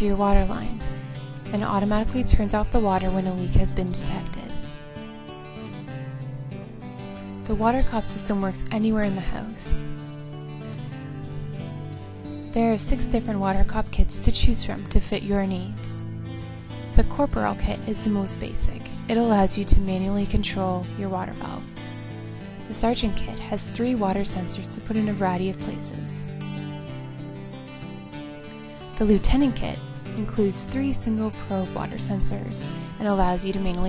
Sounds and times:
Speech: 0.0s - 0.8s, 1.5s - 4.6s, 7.5s - 9.8s, 12.6s - 16.0s, 17.0s - 21.7s, 22.7s - 26.3s, 29.0s - 33.8s
Music: 0.0s - 33.8s.

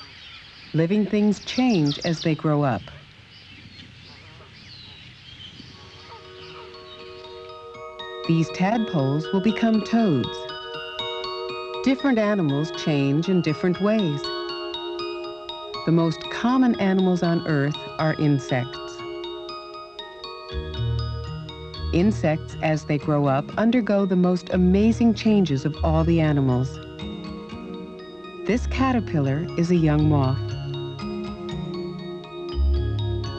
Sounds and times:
Animal: 2.8s - 6.8s.

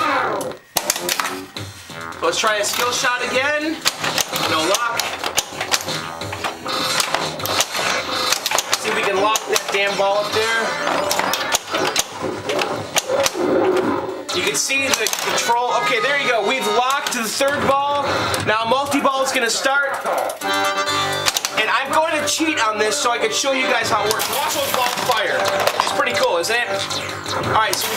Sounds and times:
Inside, small room: 0.0s - 27.9s
Music: 0.0s - 27.9s
Speech: 2.2s - 3.8s, 4.4s - 5.1s, 8.8s - 10.8s, 14.3s - 20.1s, 21.6s - 27.9s.

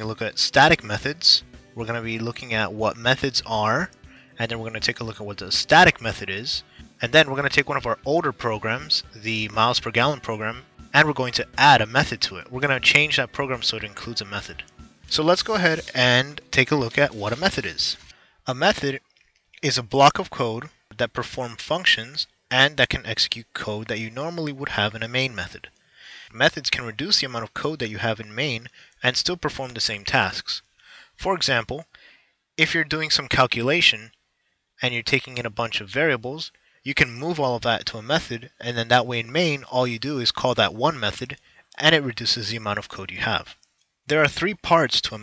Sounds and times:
Speech: 0.0s - 19.0s, 19.6s - 32.0s, 32.6s - 34.2s, 34.8s - 45.2s.

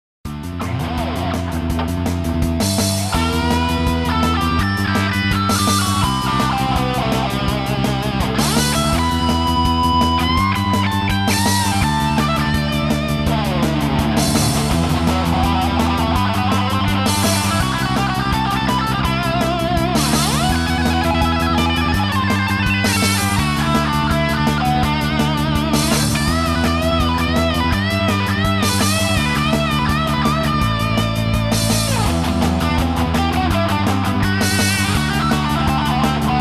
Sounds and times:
Electric guitar: 0.3s - 36.4s.

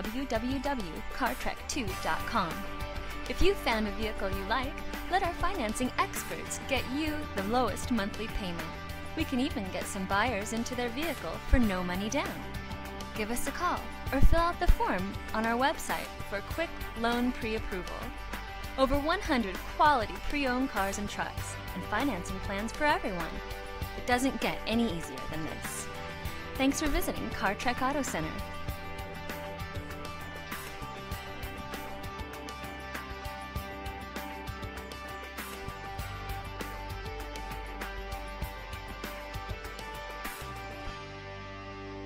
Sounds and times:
Speech: 0.0s - 2.7s, 3.3s - 12.4s, 13.2s - 18.1s, 18.8s - 23.4s, 24.0s - 25.9s, 26.6s - 28.4s
Music: 0.0s - 42.0s.

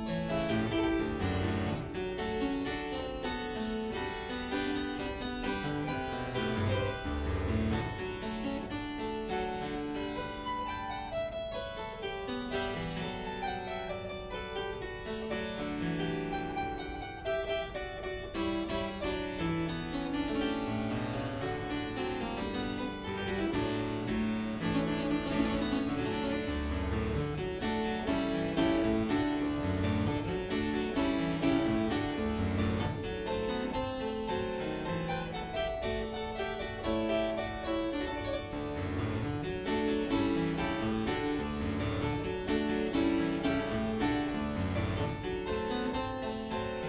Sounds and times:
Harpsichord: 0.0s - 46.8s.

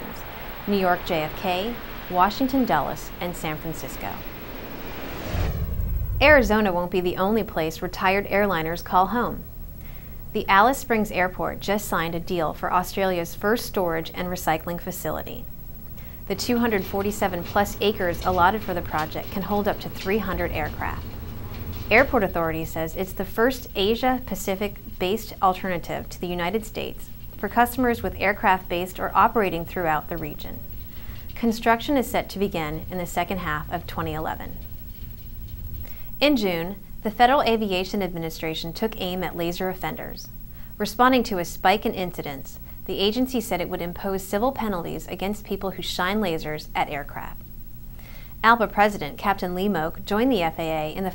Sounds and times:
Speech: 0.0s - 4.2s, 6.2s - 9.4s, 10.4s - 15.5s, 16.3s - 21.2s, 21.9s - 30.6s, 31.4s - 34.7s, 36.2s - 47.4s, 48.4s - 51.1s.

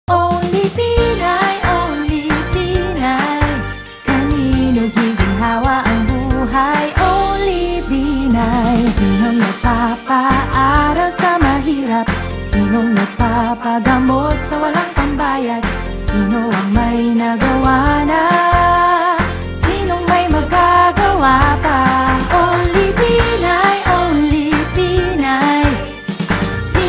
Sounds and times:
Music: 0.1s - 26.8s.

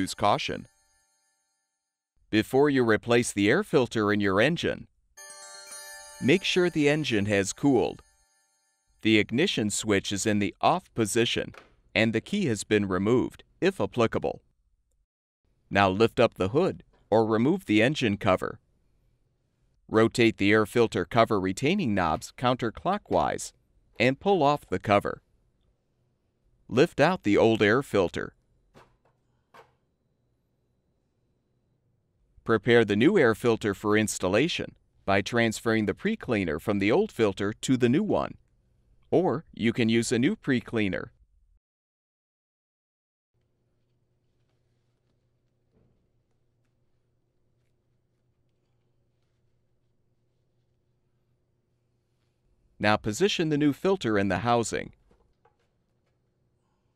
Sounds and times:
Speech: 0.0s - 0.7s, 2.3s - 4.9s, 6.2s - 8.0s, 9.0s - 14.4s, 15.7s - 18.6s, 19.9s - 25.2s, 26.7s - 28.3s, 32.5s - 38.4s, 39.1s - 41.1s, 52.8s - 55.0s.

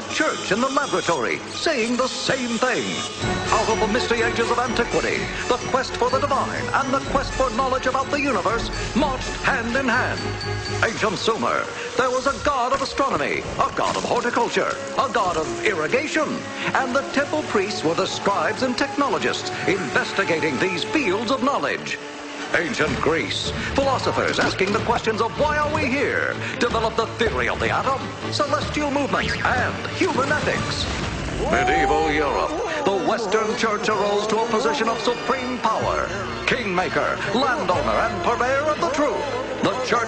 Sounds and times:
Speech: 0.0s - 3.0s, 10.8s - 40.0s
Music: 0.0s - 40.0s.

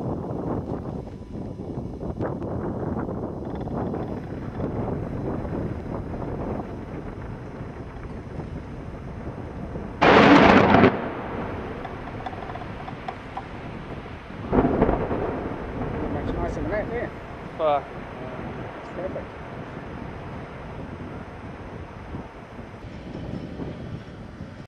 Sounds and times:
Speech: 16.1s - 19.3s.

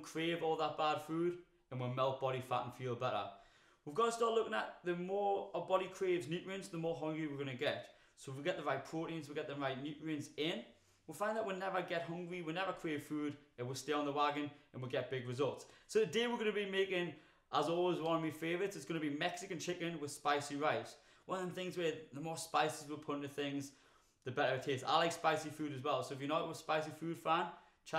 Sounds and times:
Speech: 0.0s - 27.9s.

